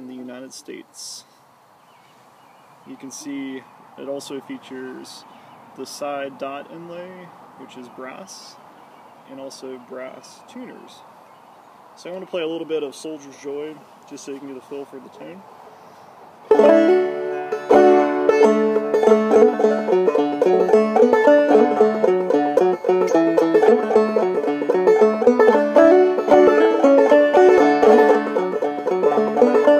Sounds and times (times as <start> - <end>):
Banjo: 16.5 - 29.7.